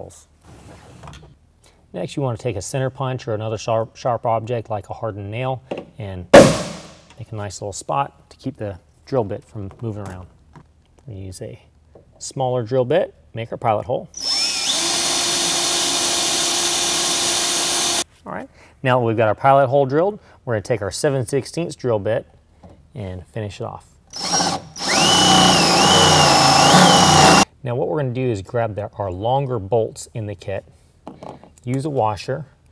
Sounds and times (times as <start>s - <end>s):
Drill: 14.2s - 18.0s, 24.2s - 27.5s.